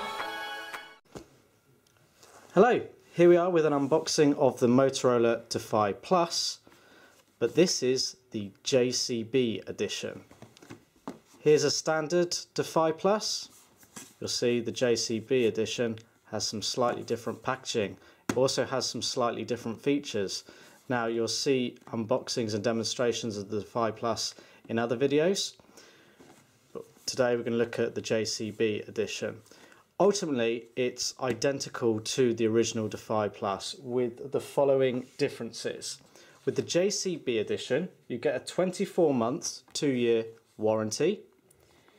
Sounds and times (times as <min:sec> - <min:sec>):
Speech: 0:02.6 - 0:06.6, 0:07.4 - 0:10.3, 0:11.4 - 0:13.6, 0:14.2 - 0:25.6, 0:26.7 - 0:29.4, 0:30.0 - 0:41.3.